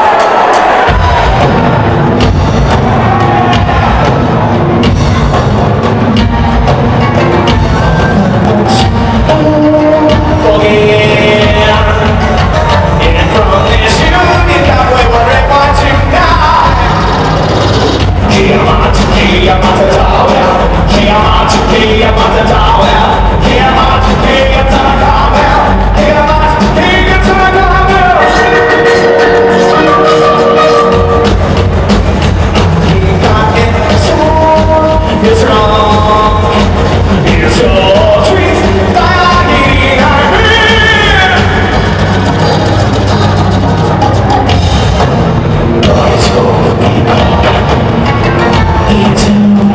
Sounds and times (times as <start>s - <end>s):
Techno: 0.0s - 49.7s.